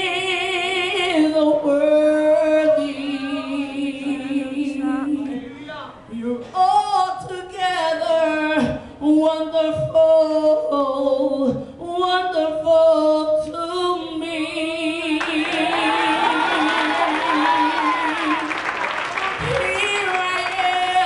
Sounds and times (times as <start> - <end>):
Female singing: 0.0 - 18.6, 19.3 - 21.0
Speech: 3.2 - 6.0.